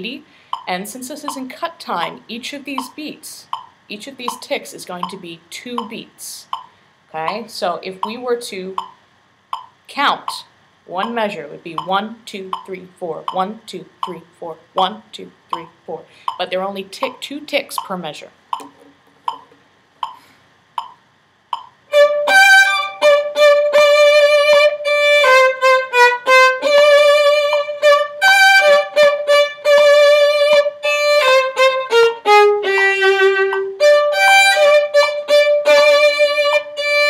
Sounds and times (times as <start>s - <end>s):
Violin, fiddle: 21.9s - 37.0s.